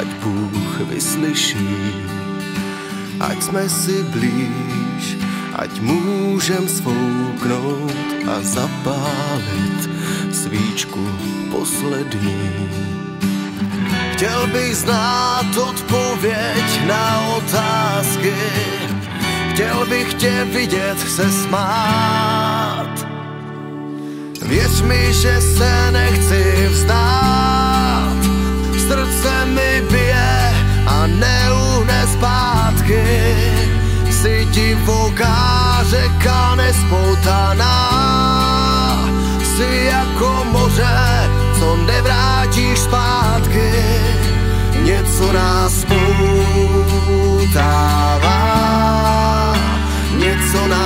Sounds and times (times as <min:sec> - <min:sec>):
Music: 0:00.0 - 0:50.8.